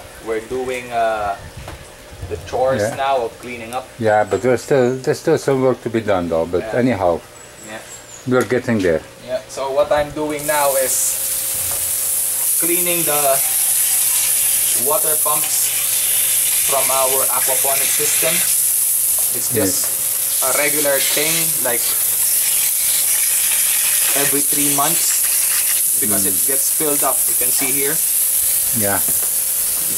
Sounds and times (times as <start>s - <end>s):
Speech: 2.2s - 11.2s, 14.8s - 15.7s, 16.7s - 18.5s, 19.4s - 22.0s, 24.1s - 25.1s, 26.0s - 28.0s, 28.8s - 29.1s
Water tap, faucet: 10.4s - 29.9s.